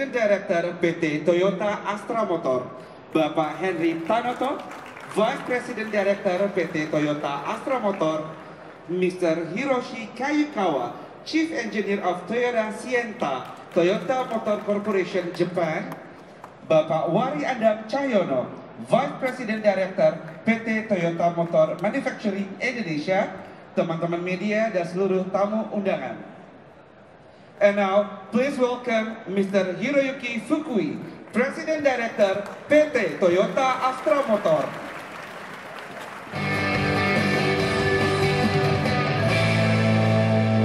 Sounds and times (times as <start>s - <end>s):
Male speech, man speaking: 0.0s - 16.0s, 16.7s - 26.3s, 27.6s - 34.9s.